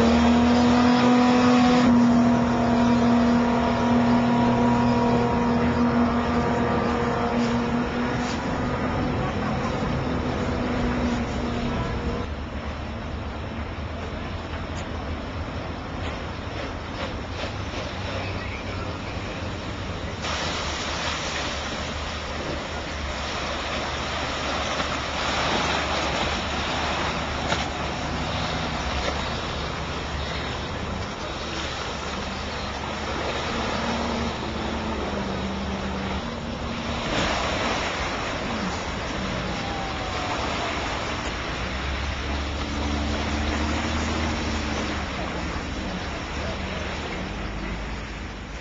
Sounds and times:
Motorboat, speedboat: 0.0s - 48.6s.

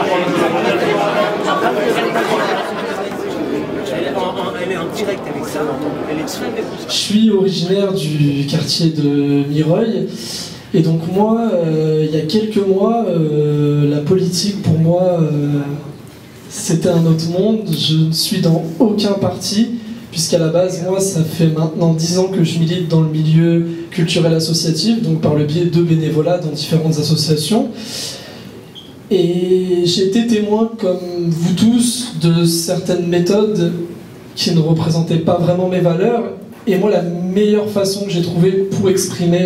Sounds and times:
Speech: 0.0s - 28.2s, 29.1s - 39.4s.

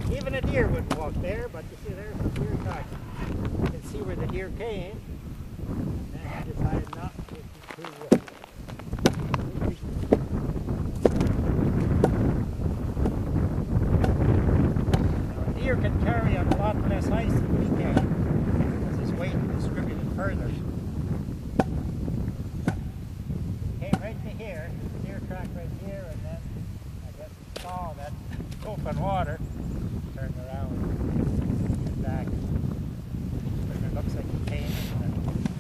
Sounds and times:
Speech: 0.0s - 3.0s, 3.7s - 5.0s, 6.1s - 8.4s, 15.3s - 18.0s, 23.8s - 29.4s, 33.7s - 35.2s.

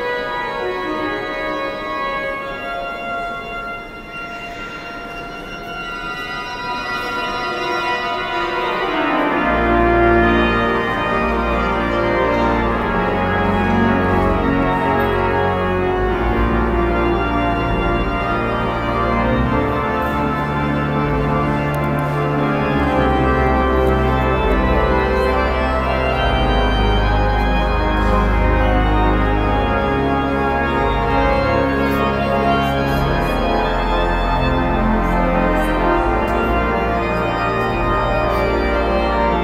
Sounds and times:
Keyboard (musical): 0.0s - 39.4s.

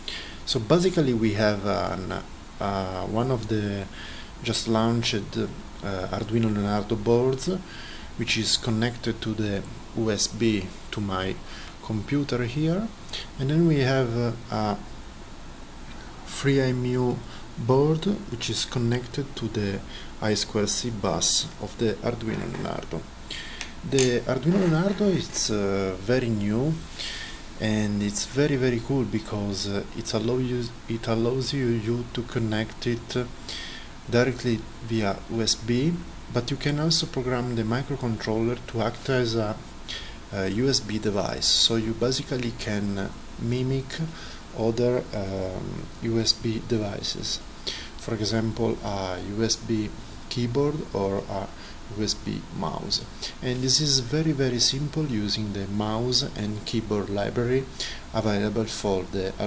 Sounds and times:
Speech: 0.5s - 14.9s, 16.3s - 23.1s, 23.8s - 26.9s, 27.6s - 33.4s, 34.1s - 39.6s, 40.3s - 59.4s.

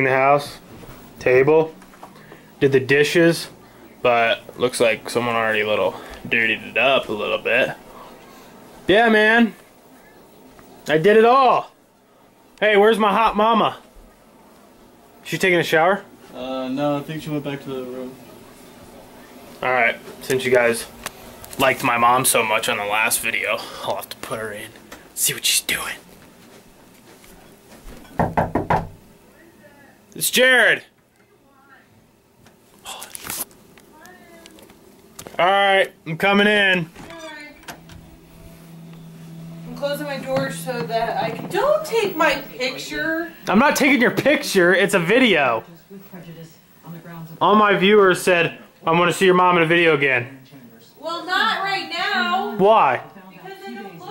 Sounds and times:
Inside, small room: 0.0s - 54.1s.

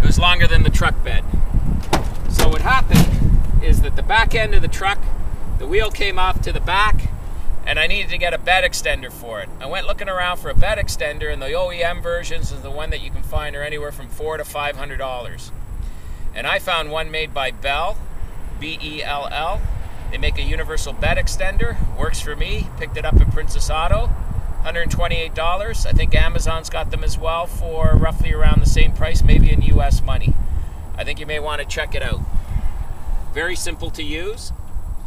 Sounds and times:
Speech: 0.0s - 1.3s, 2.3s - 7.1s, 7.7s - 15.5s, 16.4s - 18.0s, 18.6s - 30.4s, 31.0s - 32.2s, 33.3s - 34.6s.

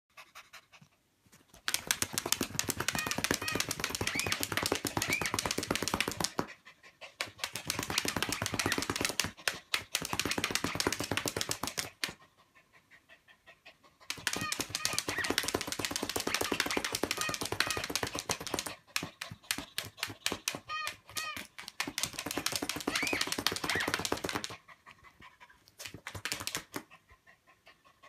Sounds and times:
Domestic animals, pets: 0.1s - 28.0s.

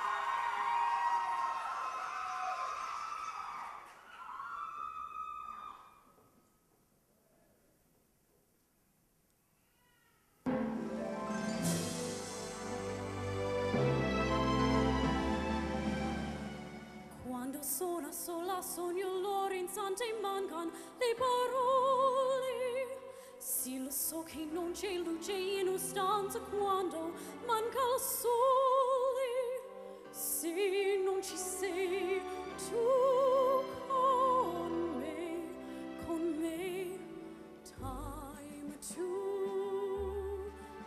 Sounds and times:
Music: 10.5s - 40.8s
Female singing: 17.2s - 40.8s.

